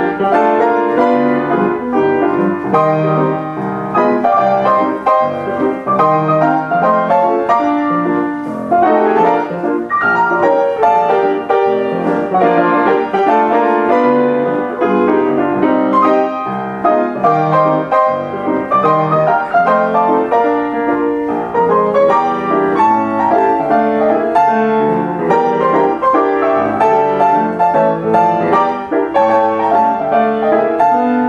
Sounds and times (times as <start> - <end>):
Music: 0.0 - 31.2.